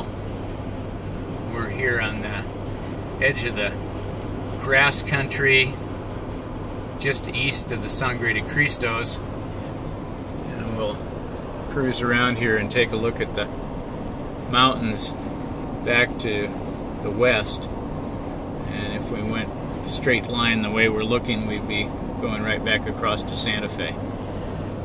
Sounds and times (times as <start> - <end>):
Speech: 1.4 - 2.5, 3.2 - 3.8, 4.6 - 5.8, 7.0 - 9.2, 10.4 - 11.0, 11.7 - 13.5, 14.5 - 15.2, 15.8 - 17.7, 18.6 - 24.0.